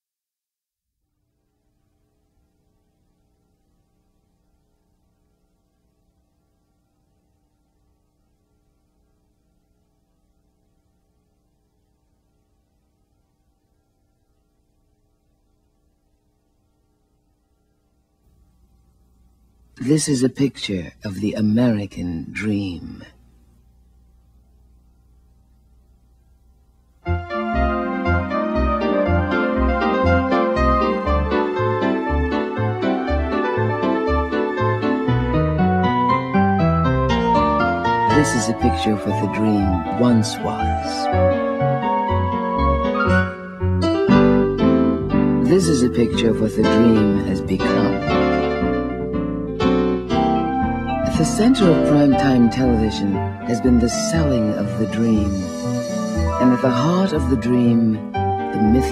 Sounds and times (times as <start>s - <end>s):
Speech: 19.8s - 23.2s, 38.1s - 41.1s, 45.4s - 48.1s, 51.0s - 58.9s
Music: 27.0s - 58.9s.